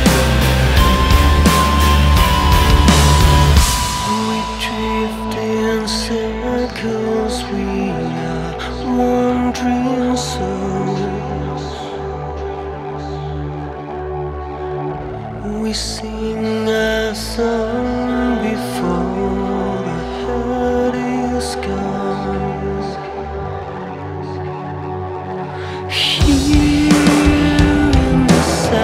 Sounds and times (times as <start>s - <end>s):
Music: 0.0s - 28.8s.